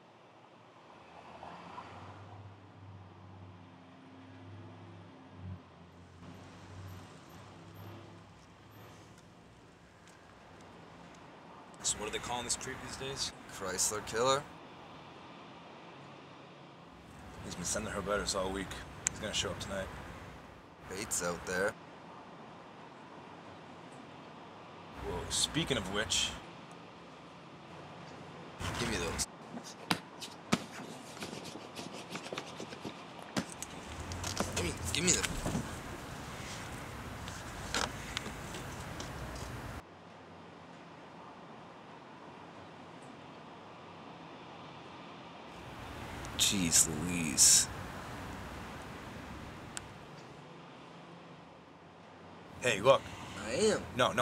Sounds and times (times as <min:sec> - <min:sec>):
Speech: 0:11.8 - 0:14.5, 0:17.4 - 0:19.9, 0:20.9 - 0:21.8, 0:25.0 - 0:26.4, 0:28.6 - 0:29.3, 0:34.5 - 0:35.4, 0:46.4 - 0:47.7, 0:52.6 - 0:54.2.